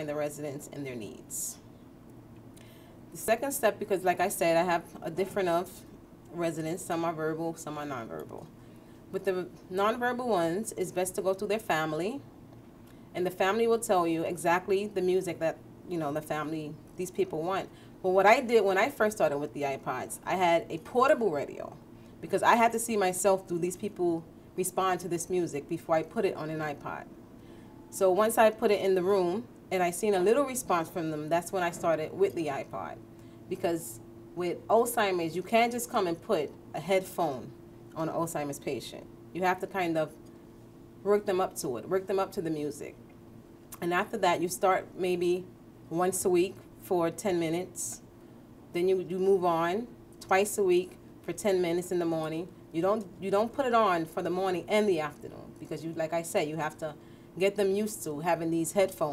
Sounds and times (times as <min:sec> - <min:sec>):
Speech: 0:00.0 - 0:01.6, 0:03.2 - 0:08.5, 0:09.1 - 0:12.3, 0:13.2 - 0:27.1, 0:28.0 - 0:40.2, 0:41.0 - 0:43.0, 0:43.8 - 0:48.0, 0:48.7 - 0:59.1.